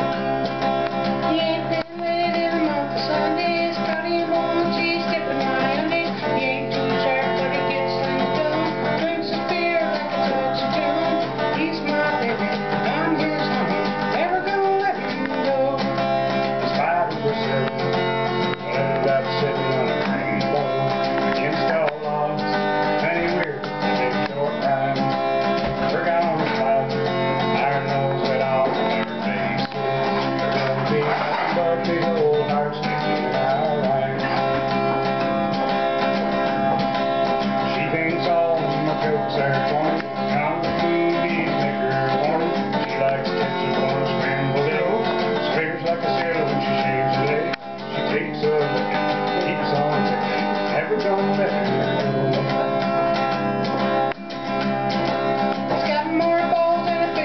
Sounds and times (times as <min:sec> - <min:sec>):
Guitar: 0:00.0 - 0:57.2
Singing: 0:01.3 - 0:16.0, 0:37.7 - 0:52.7, 0:55.7 - 0:57.2.